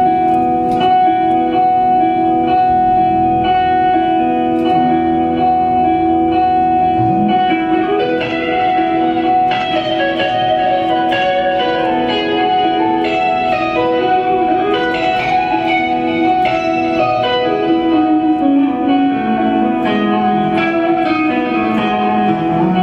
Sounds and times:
Music: 0:00.0 - 0:22.8.

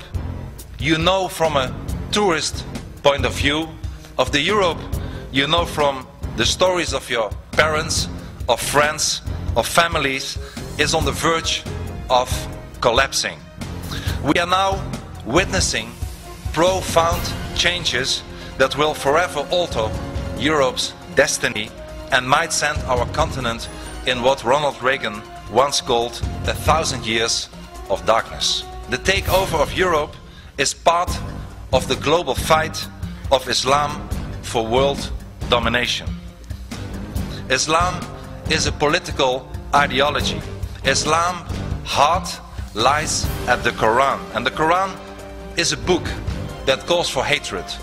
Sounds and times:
Music: 0:00.0 - 0:47.8
Male speech, man speaking: 0:00.8 - 0:13.4, 0:14.2 - 0:36.2, 0:37.5 - 0:45.0, 0:45.6 - 0:47.8.

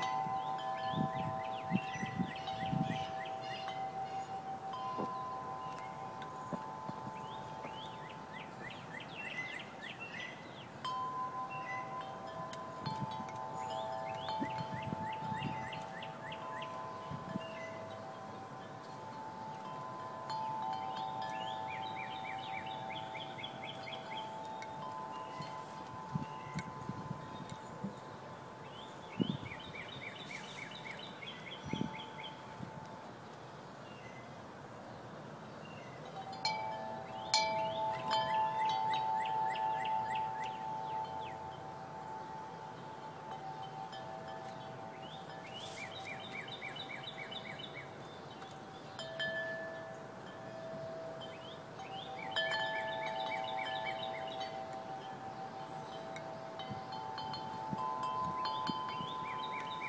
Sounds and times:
Wind chime: 0:00.0 - 0:33.2, 0:35.8 - 0:59.8.

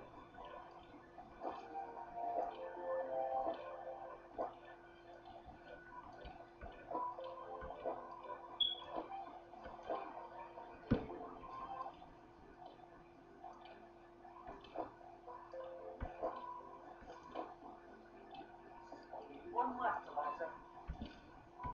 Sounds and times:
Speech: 0:19.2 - 0:20.6.

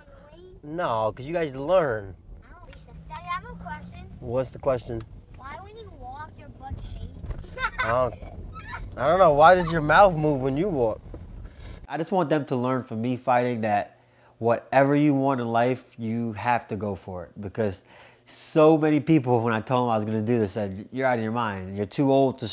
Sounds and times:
Outside, urban or manmade: 0:00.0 - 0:11.9
Speech: 0:00.7 - 0:03.3, 0:11.9 - 0:22.5.

